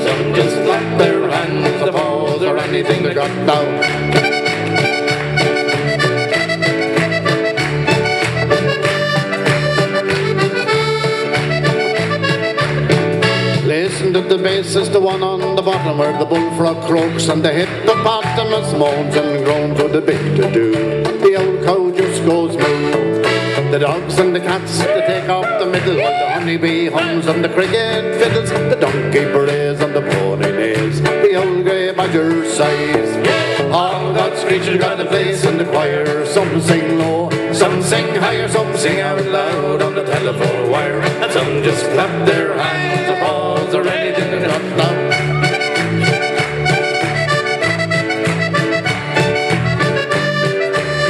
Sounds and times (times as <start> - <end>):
Music: 0.0 - 51.1.